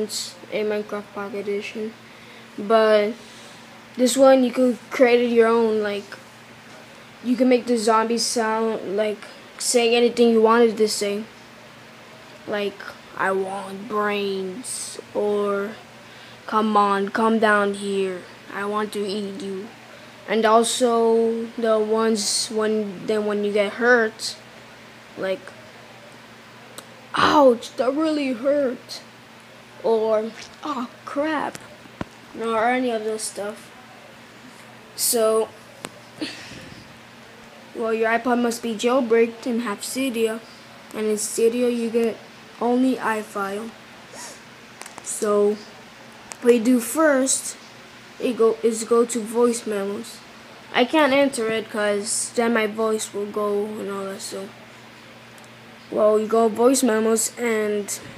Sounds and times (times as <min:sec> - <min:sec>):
Speech: 0:00.0 - 0:02.0, 0:02.6 - 0:03.3, 0:04.0 - 0:06.2, 0:07.2 - 0:11.4, 0:12.4 - 0:15.9, 0:16.5 - 0:24.4, 0:25.2 - 0:25.6, 0:26.8 - 0:29.1, 0:29.8 - 0:35.6, 0:37.7 - 0:43.8, 0:45.0 - 0:45.8, 0:46.4 - 0:47.6, 0:48.2 - 0:54.6, 0:55.9 - 0:58.1.